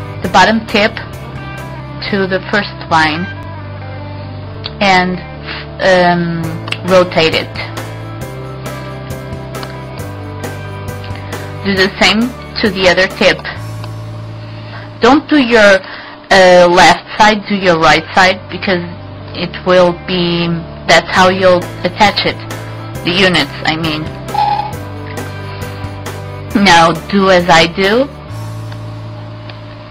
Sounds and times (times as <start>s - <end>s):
Music: 0.0s - 29.9s
Speech: 0.2s - 1.0s, 2.0s - 3.3s, 5.8s - 7.7s, 11.7s - 13.6s, 15.0s - 22.4s, 23.0s - 24.1s, 26.6s - 28.1s.